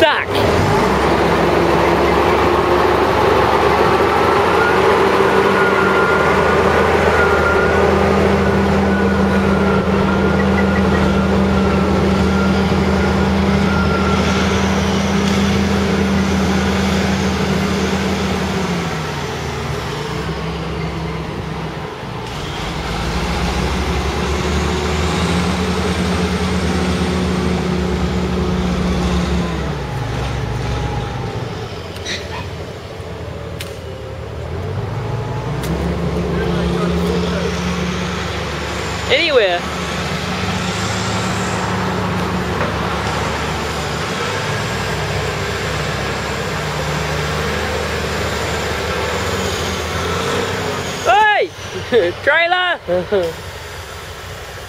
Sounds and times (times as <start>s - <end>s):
Vehicle: 0.0s - 54.6s.